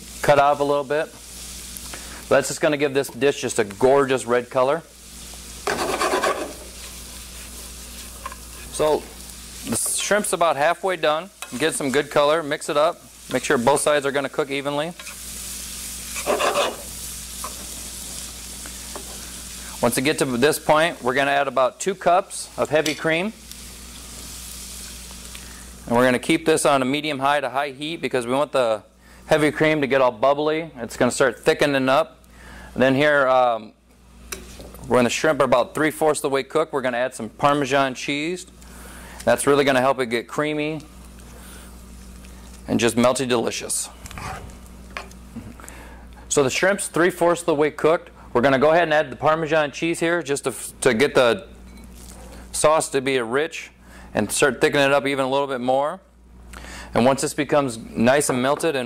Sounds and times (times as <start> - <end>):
Speech: 0.2 - 1.2, 2.3 - 4.9, 8.7 - 15.0, 19.8 - 23.4, 25.9 - 32.2, 32.8 - 33.8, 34.8 - 38.5, 39.3 - 40.9, 42.7 - 44.0, 46.3 - 51.5, 52.6 - 56.1, 57.0 - 58.8.